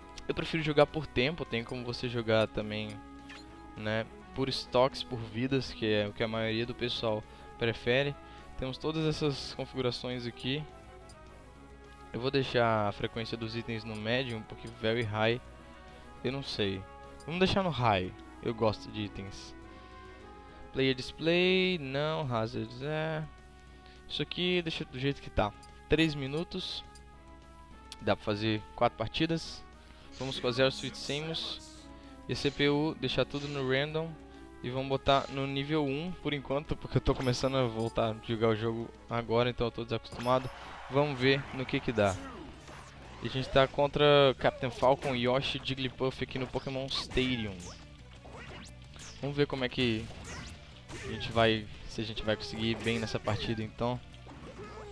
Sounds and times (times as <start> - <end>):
Music: 0.0 - 54.9
Speech: 0.3 - 3.0, 3.8 - 10.7, 12.2 - 15.4, 16.2 - 19.6, 20.8 - 23.3, 24.1 - 26.9, 28.0 - 29.6, 30.2 - 42.5, 43.2 - 47.8, 49.2 - 50.1, 51.0 - 54.9.